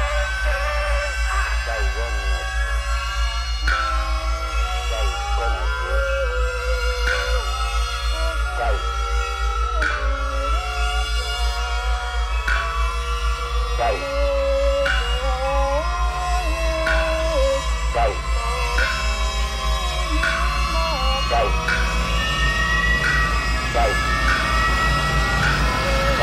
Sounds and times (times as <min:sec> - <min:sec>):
Speech: 0:00.0 - 0:02.5, 0:04.9 - 0:05.9, 0:15.1 - 0:21.6
Music: 0:00.0 - 0:26.2.